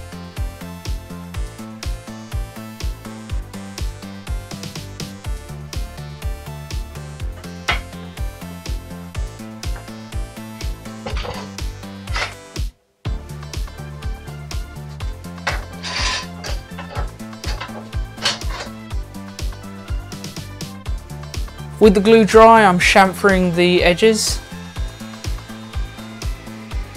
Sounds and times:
Music: 0.0 - 26.9.

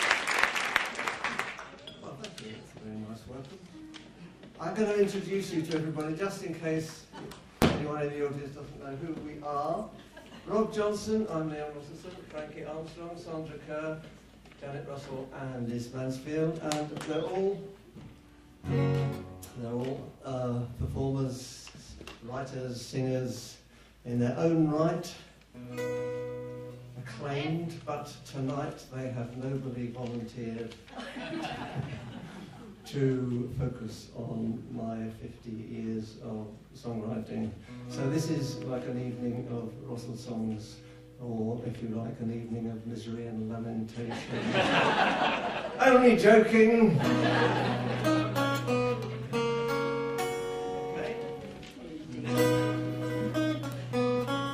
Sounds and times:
Speech: 2.0 - 3.7, 4.6 - 17.8, 19.5 - 25.3, 27.0 - 30.8, 32.9 - 44.5, 45.8 - 47.1
Music: 3.7 - 4.3, 18.0 - 20.0, 25.6 - 27.2, 37.7 - 41.3, 47.0 - 54.5.

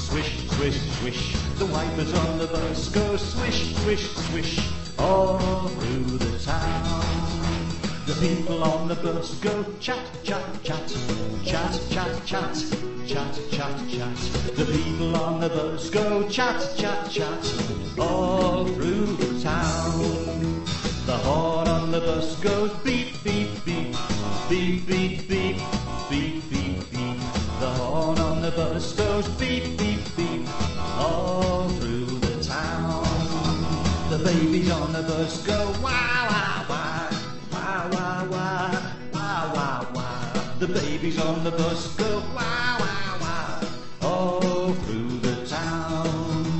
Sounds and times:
Music: 0.0 - 46.5.

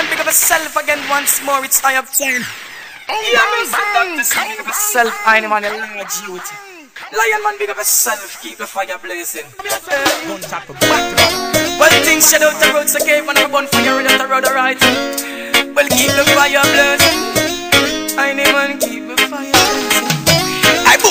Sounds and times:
Speech: 0.0 - 11.2
Music: 10.0 - 21.1.

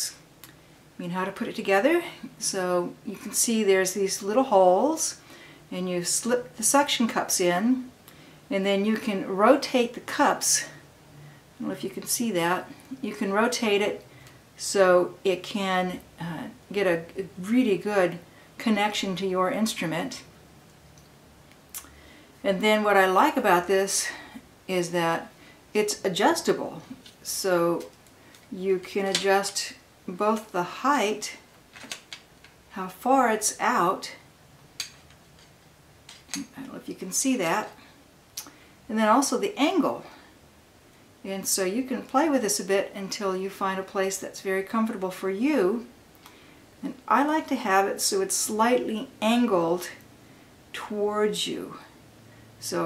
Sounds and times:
Speech: 1.0 - 7.9, 8.5 - 10.8, 11.6 - 14.0, 14.6 - 20.3, 22.4 - 27.9, 28.5 - 31.4, 32.7 - 34.2, 36.4 - 37.8, 38.9 - 40.2, 41.2 - 45.9, 46.8 - 50.0, 50.8 - 51.9, 52.6 - 52.8.

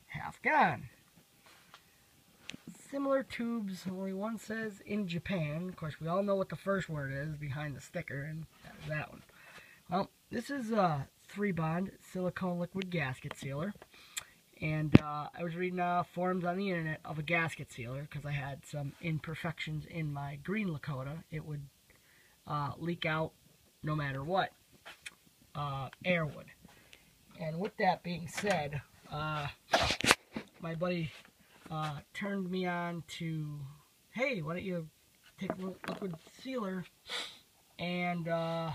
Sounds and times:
Speech: 0.0 - 1.0, 2.7 - 9.3, 9.9 - 13.8, 14.6 - 21.7, 22.5 - 24.6, 25.6 - 26.6, 27.4 - 29.6, 30.6 - 36.9, 37.8 - 38.7.

